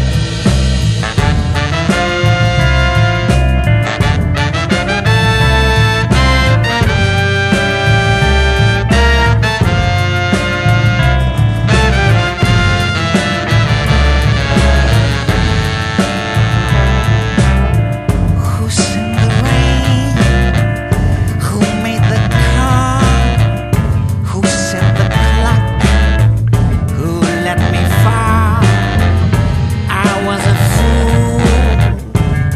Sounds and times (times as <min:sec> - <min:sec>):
Music: 0:00.0 - 0:32.5.